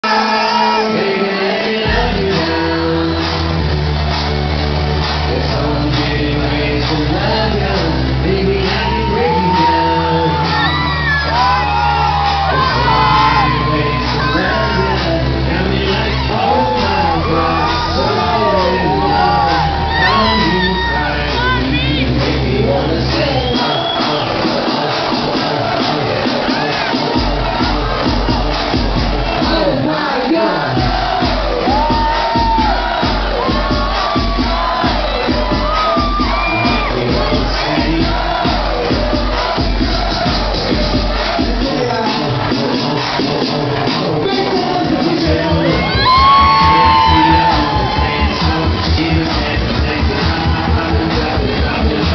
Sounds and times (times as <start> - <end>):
Music: 0.0 - 52.1
Singing: 0.0 - 52.1.